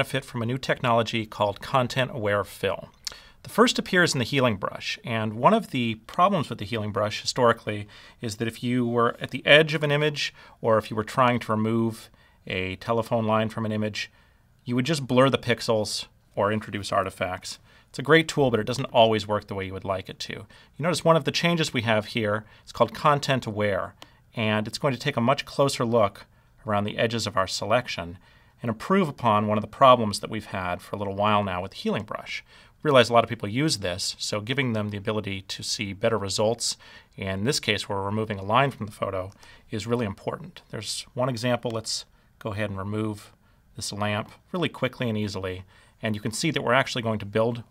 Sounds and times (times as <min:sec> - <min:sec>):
Speech: 0:00.0 - 0:47.7.